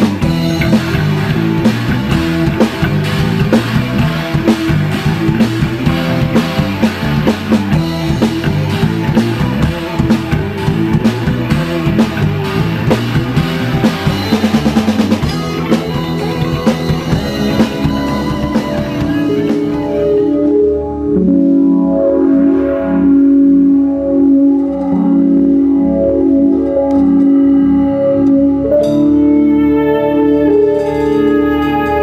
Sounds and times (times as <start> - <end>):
Drum: 0.0 - 20.4
Piano: 0.0 - 32.0.